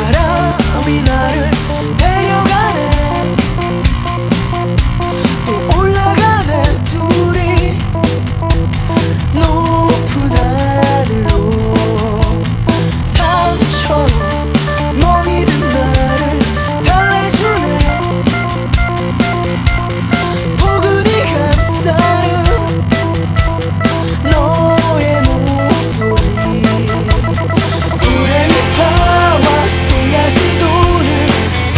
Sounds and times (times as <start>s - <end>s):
Pop music: 0.0s - 31.7s.